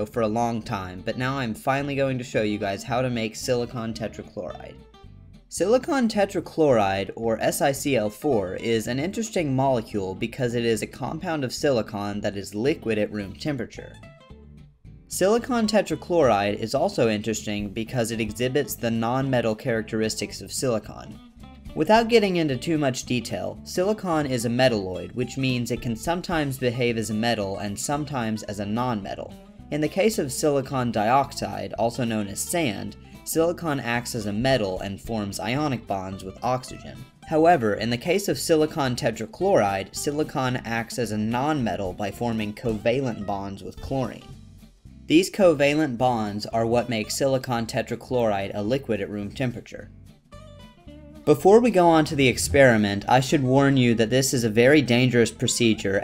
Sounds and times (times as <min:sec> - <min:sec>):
Speech: 0:00.0 - 0:04.8, 0:05.5 - 0:14.0, 0:15.1 - 0:44.3, 0:45.1 - 0:49.9, 0:51.3 - 0:56.0
Music: 0:00.0 - 0:56.0.